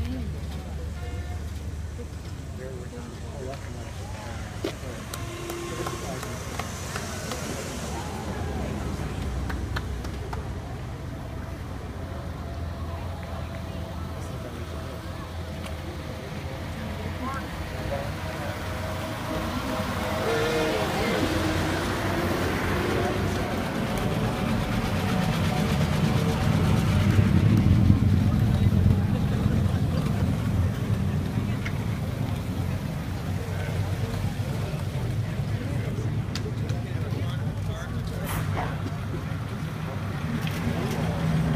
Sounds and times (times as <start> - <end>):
Car: 0.0 - 41.5
Speech: 0.0 - 41.5.